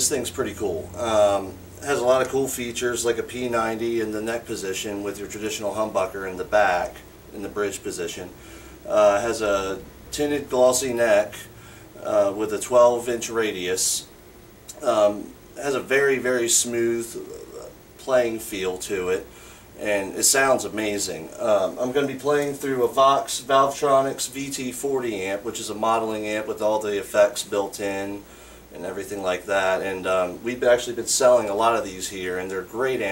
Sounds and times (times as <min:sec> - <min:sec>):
Speech: 0:00.0 - 0:14.1, 0:14.7 - 0:33.1.